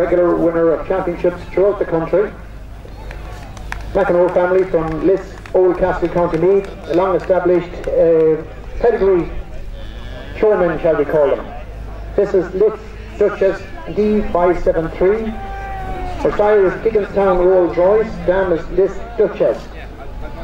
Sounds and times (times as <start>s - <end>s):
Speech: 0.0s - 2.4s, 3.2s - 20.4s.